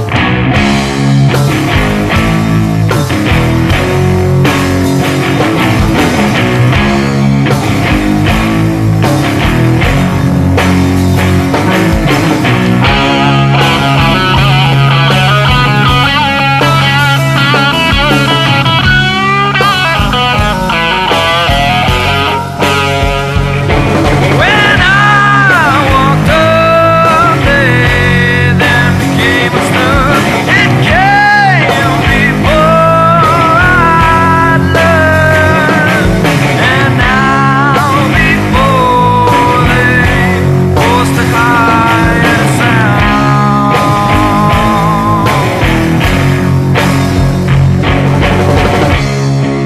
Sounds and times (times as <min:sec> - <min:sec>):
Music: 0:00.0 - 0:49.6.